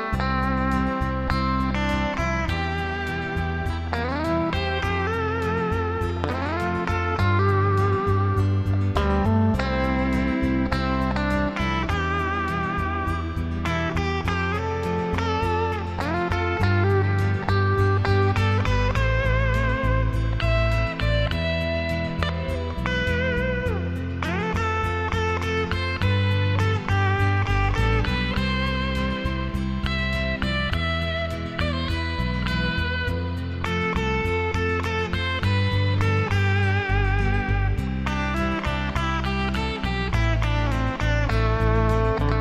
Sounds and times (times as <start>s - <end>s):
Electric guitar: 0.0s - 42.4s
Strum: 0.0s - 42.4s.